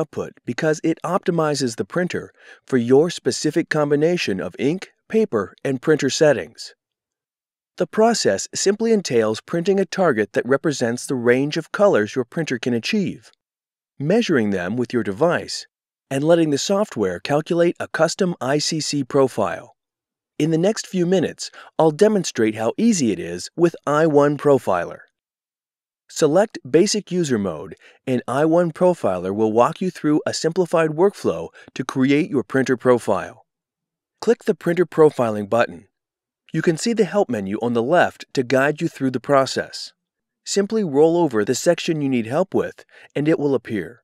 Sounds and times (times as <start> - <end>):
Speech: 0.0 - 6.8, 7.8 - 13.4, 14.0 - 19.8, 20.4 - 25.1, 26.1 - 33.4, 34.2 - 35.9, 36.5 - 44.0.